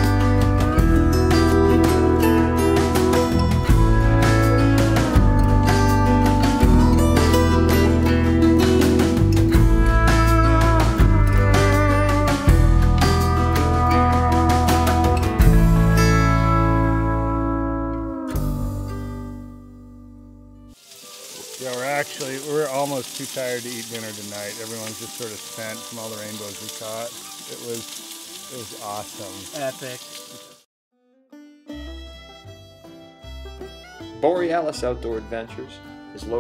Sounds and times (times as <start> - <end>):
Music: 0.0 - 36.4
Speech: 21.6 - 27.8, 28.5 - 30.0, 34.2 - 36.4.